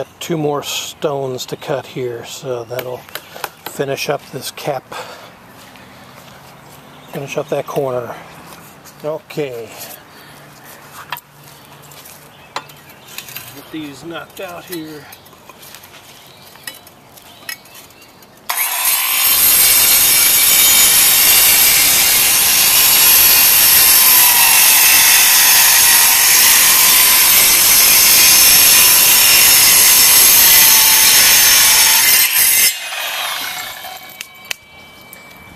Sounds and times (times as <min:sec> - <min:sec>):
Outside, rural or natural: 0:00.0 - 0:35.5.